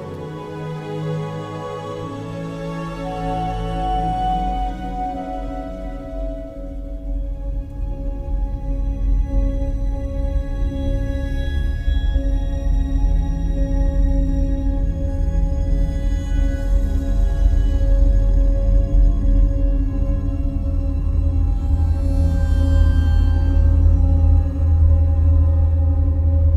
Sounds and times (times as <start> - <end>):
Music: 0.0 - 26.5.